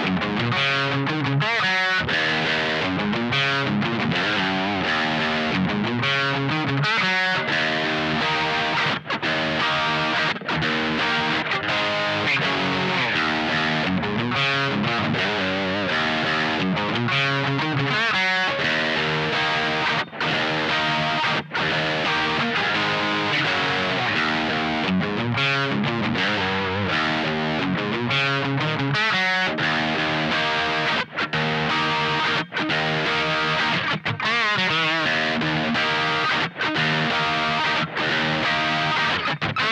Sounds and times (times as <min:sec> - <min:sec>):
Electric guitar: 0:00.0 - 0:39.7.